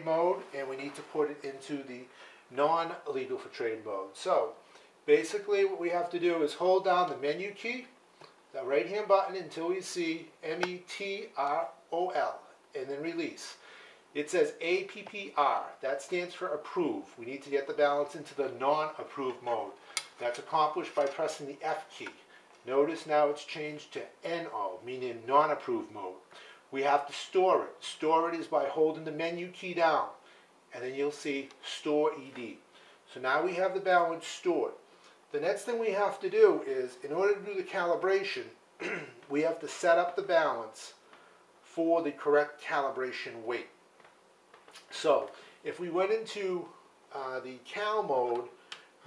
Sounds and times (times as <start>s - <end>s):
Speech: 0.0s - 13.6s, 14.2s - 41.0s, 41.6s - 43.8s, 44.8s - 49.0s
Inside, small room: 0.0s - 49.0s.